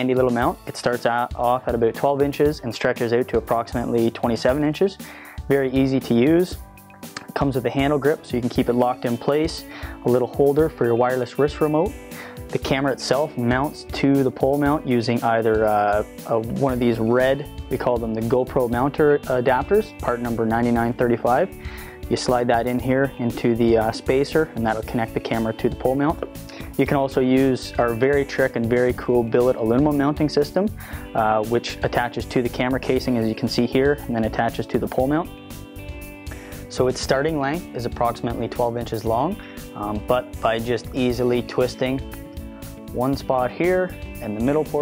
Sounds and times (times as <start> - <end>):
Speech: 0.0 - 6.6, 7.3 - 11.9, 12.5 - 21.5, 22.1 - 35.3, 36.7 - 42.0, 42.9 - 44.8
Music: 0.0 - 44.8.